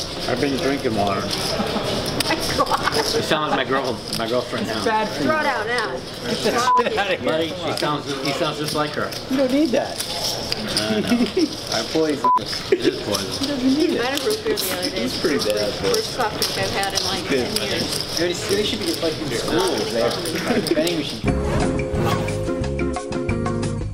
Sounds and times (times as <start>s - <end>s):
Music: 20.4s - 23.9s.